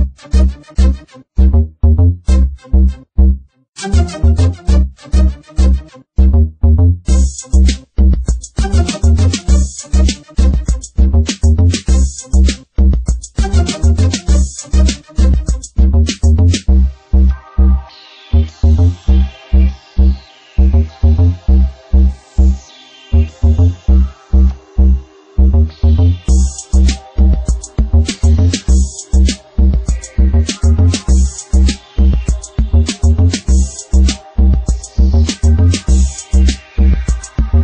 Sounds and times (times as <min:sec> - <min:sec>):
Music: 0:00.0 - 0:37.6.